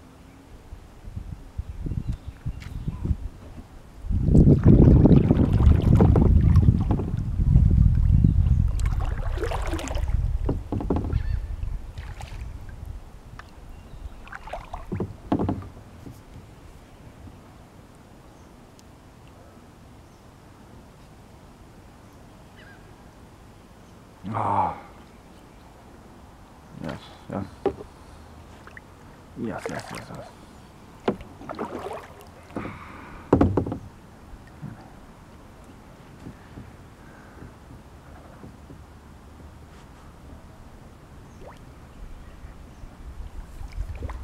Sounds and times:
Rowboat, canoe, kayak: 0.0 - 44.2
Speech: 26.8 - 27.6, 29.4 - 30.4.

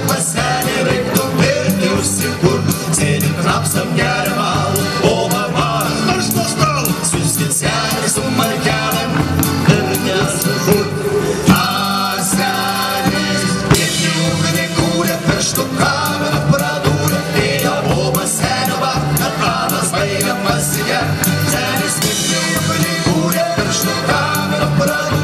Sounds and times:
Folk music: 0.0 - 25.2.

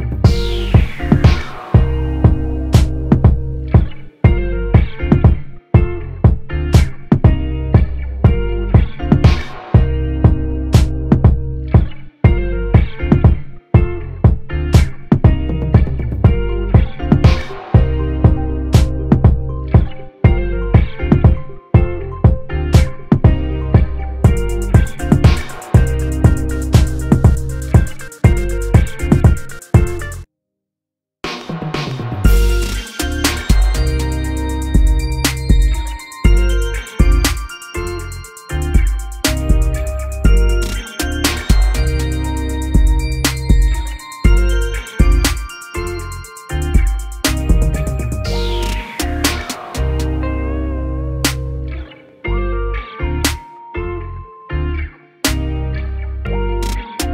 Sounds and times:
Pop music: 0.0 - 5.9, 6.8 - 13.9, 14.8 - 30.3, 31.3 - 51.9, 52.8 - 53.9, 56.6 - 57.1.

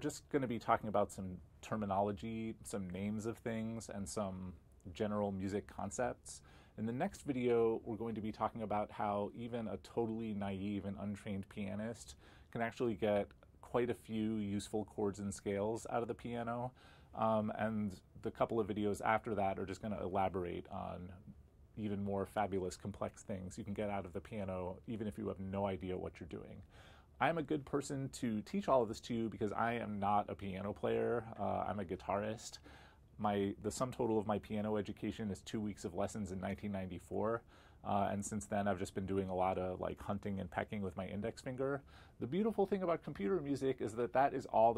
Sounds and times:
Speech: 0.0 - 32.6, 33.2 - 44.7.

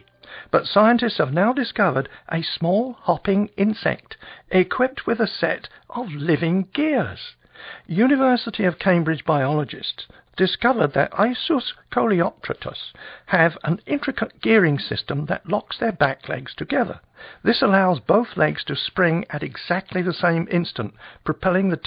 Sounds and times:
Speech: 0.0 - 21.8.

